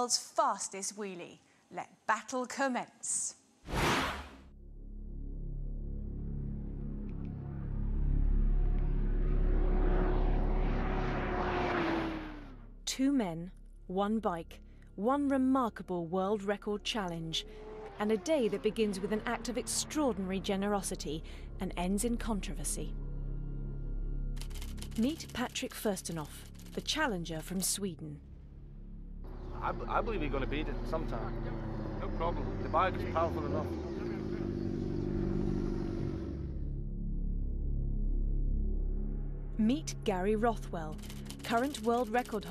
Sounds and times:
Music: 4.5s - 9.5s, 20.2s - 29.4s, 36.7s - 42.5s
Motorcycle: 6.6s - 12.8s, 16.8s - 22.1s, 29.3s - 37.2s.

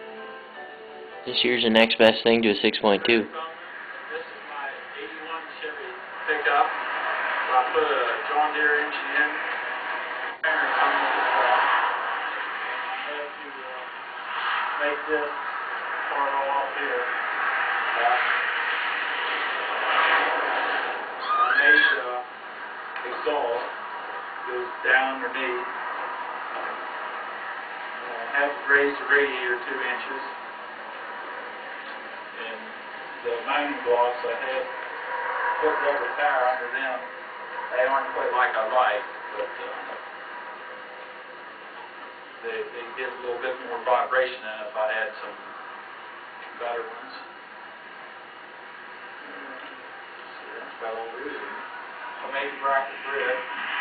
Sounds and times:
Speech: 1.3s - 6.8s, 7.5s - 9.5s, 10.4s - 11.7s, 12.8s - 13.9s, 14.8s - 15.4s, 16.1s - 17.1s, 18.0s - 18.4s, 21.6s - 22.3s, 23.0s - 23.7s, 24.5s - 25.7s, 28.0s - 30.3s, 32.4s - 34.8s, 35.6s - 37.1s, 37.7s - 40.0s, 42.4s - 45.4s, 46.5s - 47.3s, 49.2s - 51.6s, 52.2s - 53.5s
Vehicle: 3.4s - 40.4s.

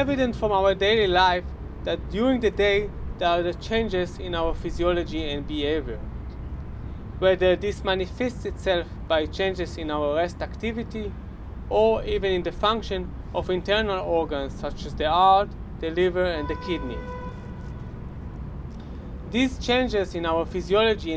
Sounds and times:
Speech: 0.0s - 6.0s, 7.2s - 11.1s, 11.7s - 17.0s, 19.3s - 21.1s.

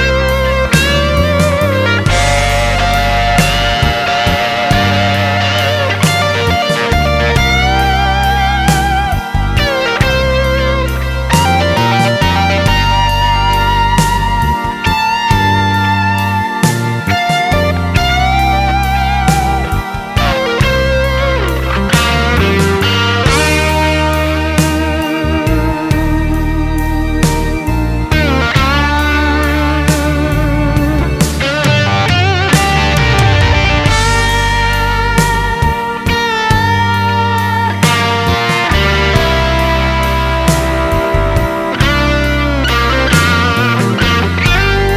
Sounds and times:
Music: 0.0s - 44.9s.

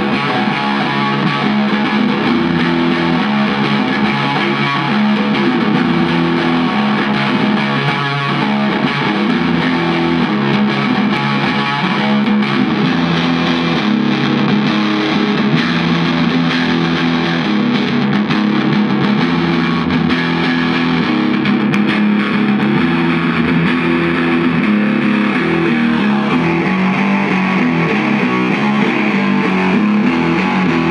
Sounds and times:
Electric guitar: 0.0s - 30.9s
Strum: 0.0s - 30.9s.

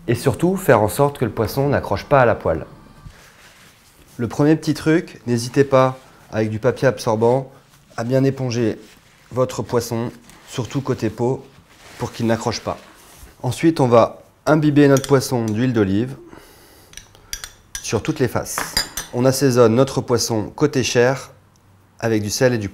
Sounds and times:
Speech: 0.0s - 2.8s, 4.2s - 16.3s, 17.8s - 21.4s, 22.0s - 22.7s.

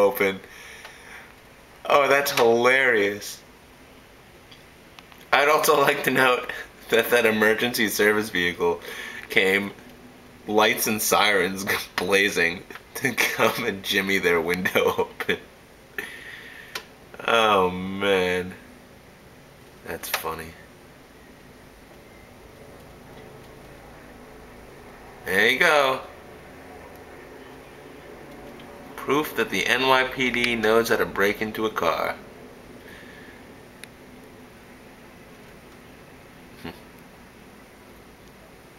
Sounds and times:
Speech: 0.0s - 0.5s, 1.8s - 3.4s, 5.3s - 9.8s, 10.5s - 15.4s, 17.2s - 18.6s, 19.8s - 20.7s, 25.2s - 26.1s, 29.0s - 32.2s.

